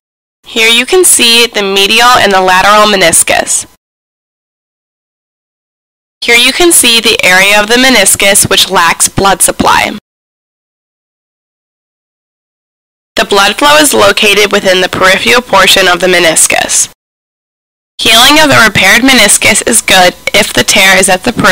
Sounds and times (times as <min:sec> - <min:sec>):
Speech: 0:00.5 - 0:03.8, 0:06.2 - 0:10.0, 0:13.2 - 0:17.0, 0:18.0 - 0:21.5.